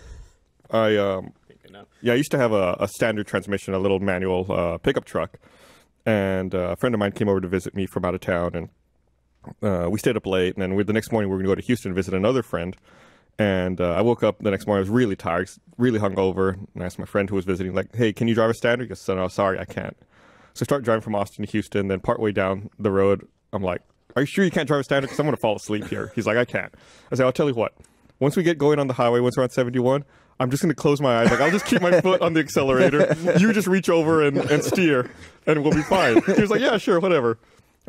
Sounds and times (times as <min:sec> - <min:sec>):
Speech: 0:00.7 - 0:05.4, 0:06.1 - 0:08.8, 0:09.4 - 0:12.8, 0:13.4 - 0:20.0, 0:20.6 - 0:37.8.